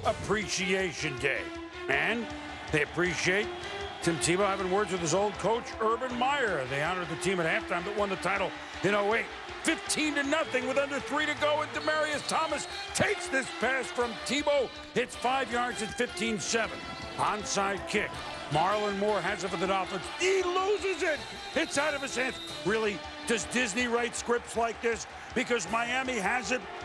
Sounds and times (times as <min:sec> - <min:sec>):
Male speech, man speaking: 0:00.0 - 0:26.7
Music: 0:00.0 - 0:26.8.